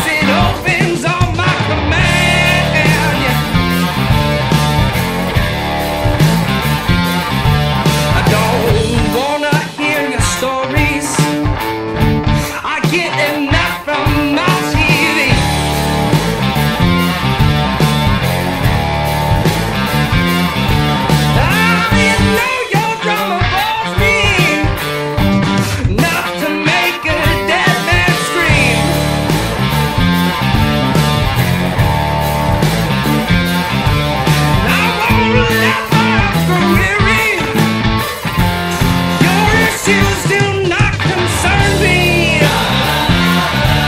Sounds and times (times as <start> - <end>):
Rock music: 0.0 - 43.8.